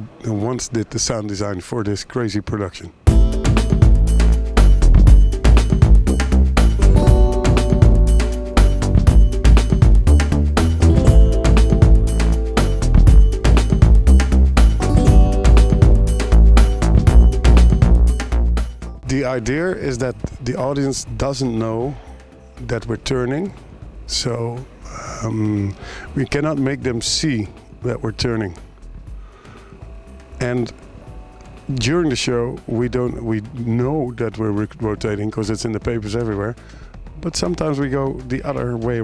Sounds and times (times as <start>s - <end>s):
Speech: 0.0s - 3.0s, 19.0s - 22.0s, 22.6s - 28.6s, 30.4s - 30.8s, 31.7s - 36.6s, 37.2s - 39.0s
Music: 3.0s - 39.0s.